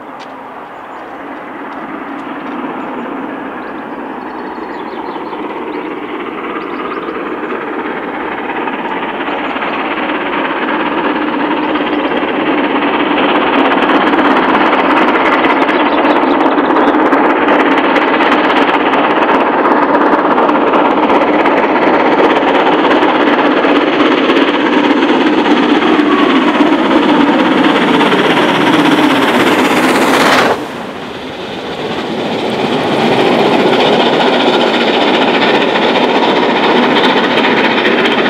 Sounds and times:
Railroad car, train wagon: 0.0s - 38.3s
Train: 0.0s - 38.3s.

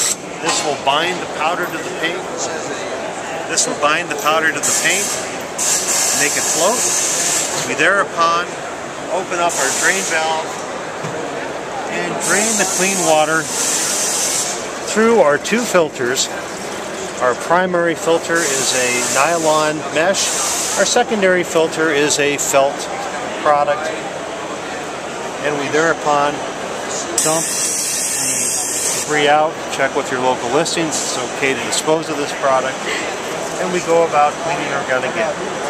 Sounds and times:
Inside, public space: 0.0s - 35.6s
Speech: 0.4s - 5.2s, 6.1s - 6.9s, 7.6s - 10.5s, 11.8s - 13.7s, 14.9s - 16.4s, 17.2s - 24.2s, 25.4s - 32.9s, 33.6s - 35.6s.

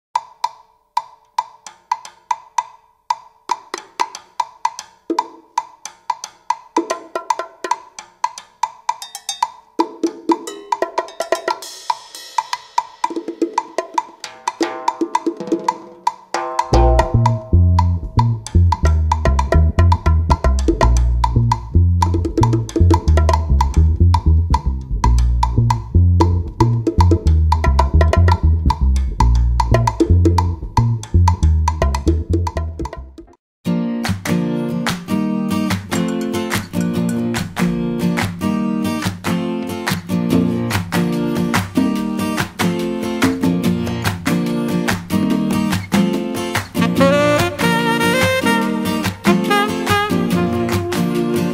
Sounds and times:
Wood block: 0.2s - 11.6s, 13.1s - 33.3s.

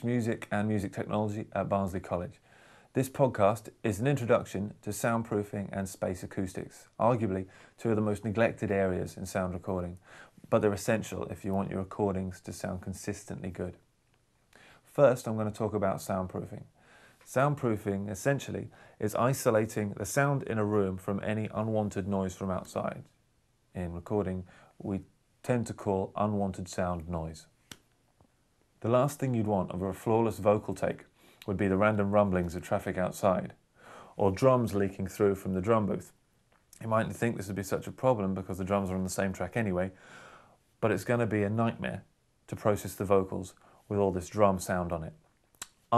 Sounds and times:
Speech: 0.0s - 13.9s, 14.9s - 27.6s, 28.8s - 36.2s, 36.8s - 40.0s, 40.8s - 45.9s.

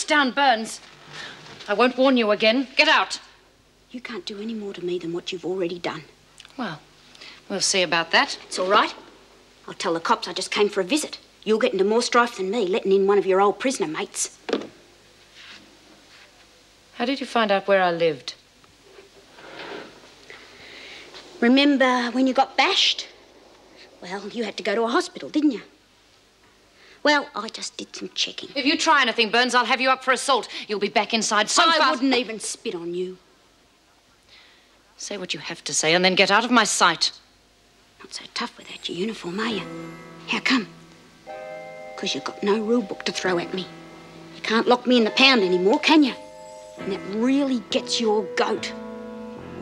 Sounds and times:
Speech: 0.0s - 0.8s, 1.7s - 3.3s, 3.9s - 6.8s, 7.5s - 9.0s, 9.7s - 14.4s, 17.0s - 18.4s, 21.4s - 23.1s, 24.0s - 25.8s, 27.0s - 33.2s, 35.0s - 37.2s, 38.0s - 39.7s, 40.3s - 40.7s, 42.0s - 43.7s, 44.4s - 46.2s, 46.8s - 48.8s.

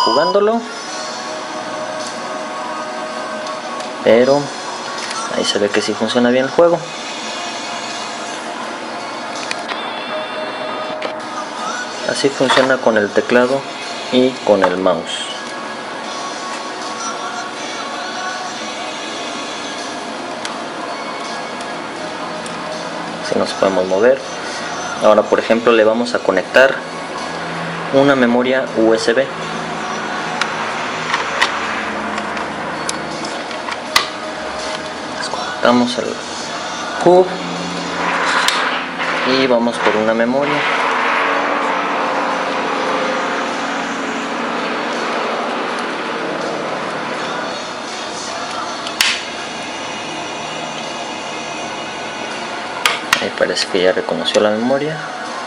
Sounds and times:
Speech: 0.0s - 0.7s, 4.0s - 4.6s, 5.3s - 6.9s, 12.0s - 15.4s, 23.2s - 24.3s, 25.0s - 26.8s, 27.9s - 29.3s, 35.2s - 36.3s, 37.0s - 37.4s, 39.2s - 40.6s, 53.2s - 55.2s
Music: 0.0s - 39.2s, 46.4s - 55.4s.

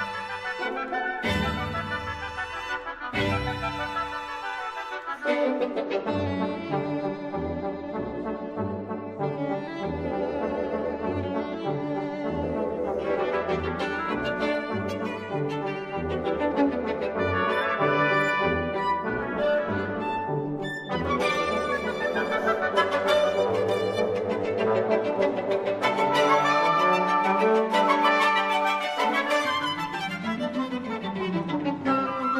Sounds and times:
String section: 0.0s - 32.3s.

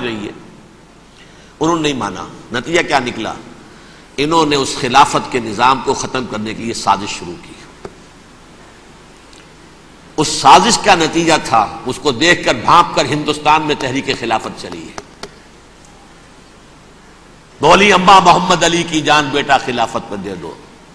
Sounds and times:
Speech: 0.0s - 0.4s, 1.6s - 3.5s, 4.2s - 7.7s, 10.2s - 15.0s, 17.6s - 20.6s.

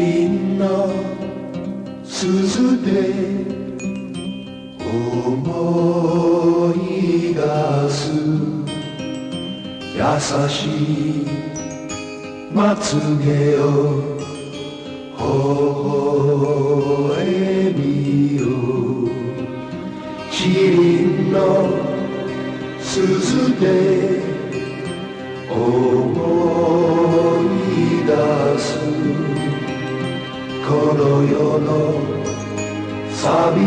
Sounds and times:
Music: 0.0s - 33.6s.

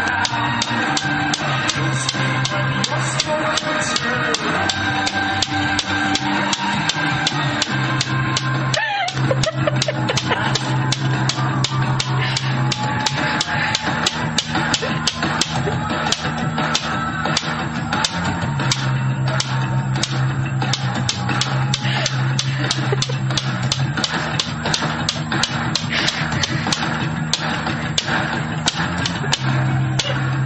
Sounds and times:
Music: 0.0s - 30.4s.

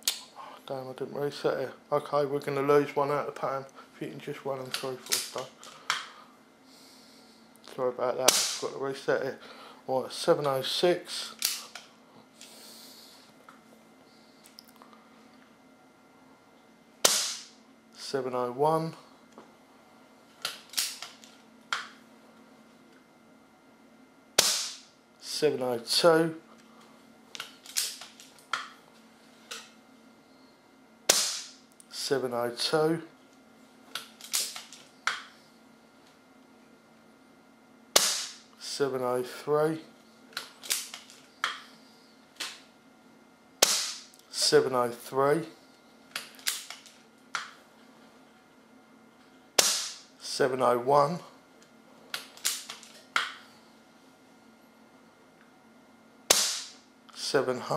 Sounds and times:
Speech: 0.7s - 5.6s, 7.7s - 11.4s, 18.0s - 19.1s, 25.2s - 26.5s, 31.9s - 33.2s, 38.6s - 39.9s, 44.3s - 45.6s, 50.2s - 51.4s, 57.2s - 57.7s.

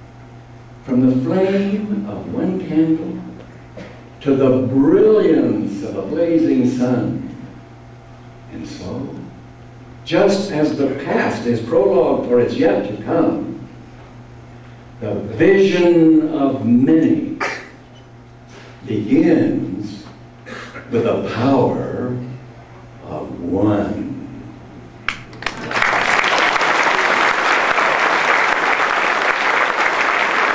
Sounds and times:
Narration, monologue: 0.2s - 25.0s.

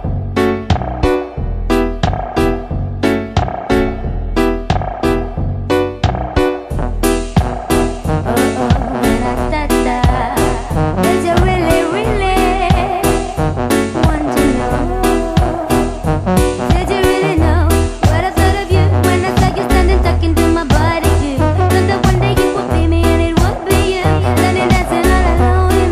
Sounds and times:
Music: 0.0s - 25.9s.

